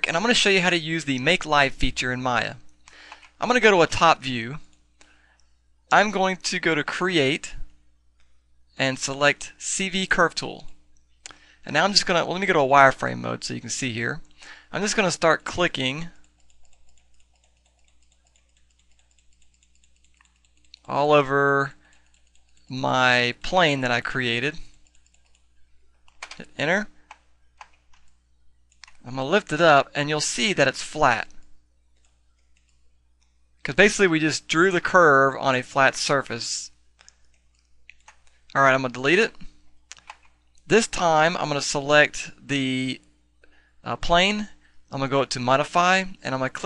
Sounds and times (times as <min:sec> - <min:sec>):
Speech: 0:00.0 - 0:02.6, 0:03.4 - 0:04.6, 0:05.9 - 0:07.7, 0:08.8 - 0:10.8, 0:11.6 - 0:16.2, 0:20.8 - 0:21.8, 0:22.7 - 0:24.7, 0:26.3 - 0:26.9, 0:29.0 - 0:31.4, 0:33.6 - 0:36.8, 0:38.5 - 0:39.5, 0:40.7 - 0:43.0, 0:43.8 - 0:46.6.